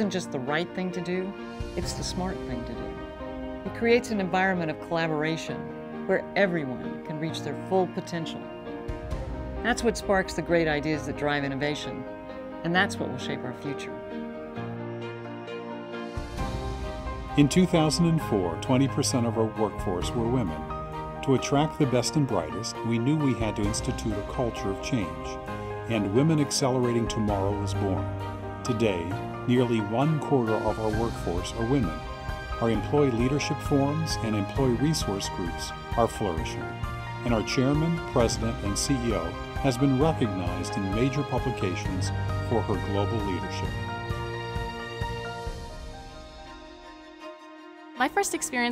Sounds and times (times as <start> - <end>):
Music: 0.0 - 48.7
Speech: 3.7 - 8.4, 12.6 - 14.0, 17.4 - 20.5, 21.3 - 28.0, 28.7 - 32.0, 32.6 - 36.6, 37.3 - 43.7.